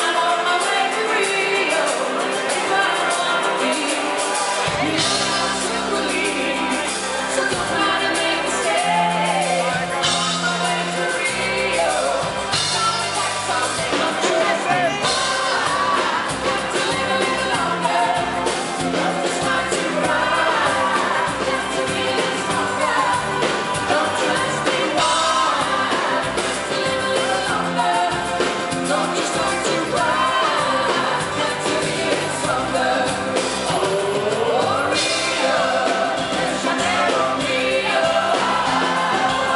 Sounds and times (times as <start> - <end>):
Music: 0.0 - 39.5.